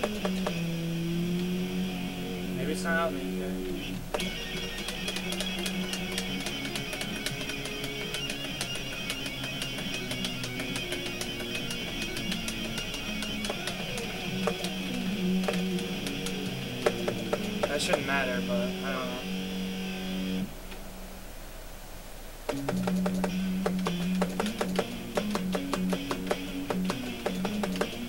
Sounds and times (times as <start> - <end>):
Guitar: 0.0 - 21.0, 22.5 - 28.0
Speech: 2.4 - 3.8, 17.6 - 19.2.